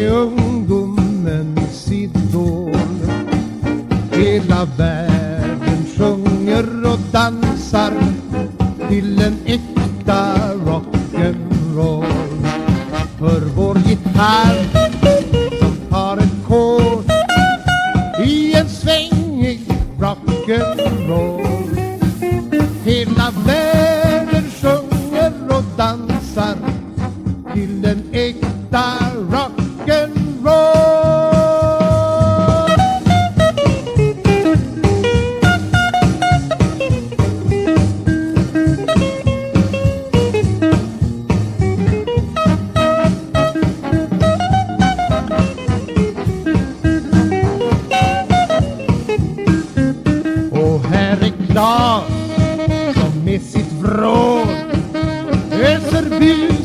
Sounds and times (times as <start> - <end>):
Rock and roll: 0.0 - 56.6.